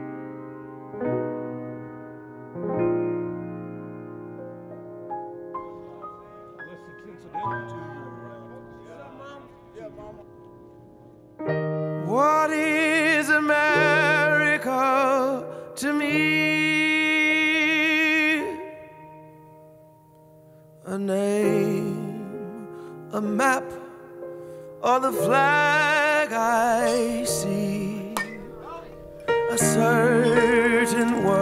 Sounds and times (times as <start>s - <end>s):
Music: 0.0s - 31.4s.